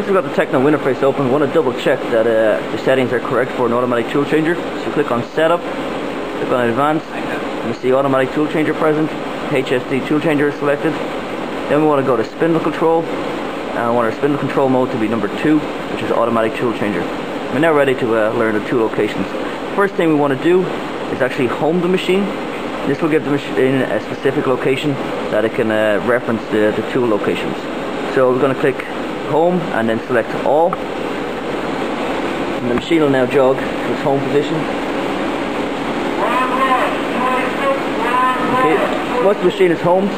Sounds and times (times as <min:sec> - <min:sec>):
Speech: 0:00.0 - 0:05.7, 0:06.4 - 0:11.0, 0:11.7 - 0:13.1, 0:13.8 - 0:22.3, 0:22.9 - 0:30.8, 0:32.6 - 0:34.7, 0:36.2 - 0:40.1.